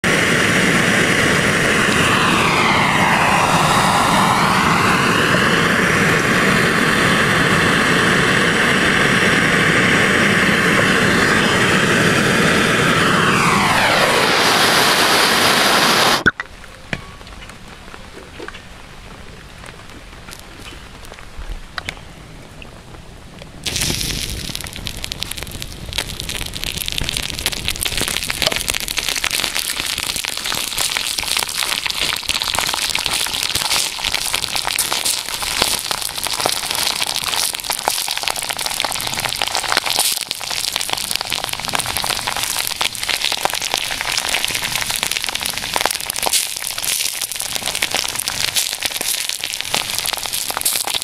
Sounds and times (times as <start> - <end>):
Outside, urban or manmade: 0.0 - 51.0.